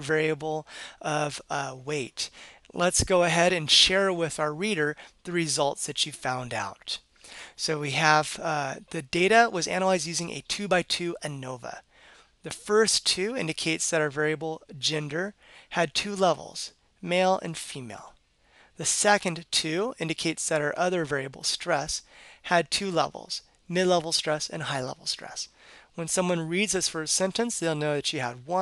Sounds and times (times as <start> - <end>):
Speech: 0.0 - 7.0, 7.6 - 11.8, 12.5 - 18.2, 18.8 - 28.6.